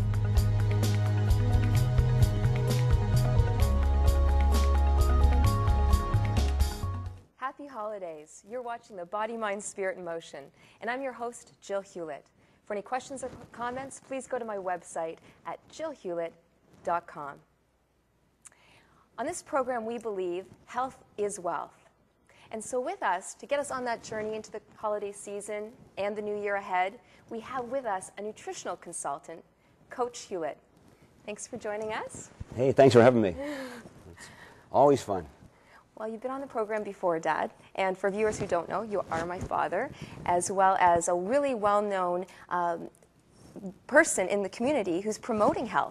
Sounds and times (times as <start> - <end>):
Music: 0.0 - 7.3.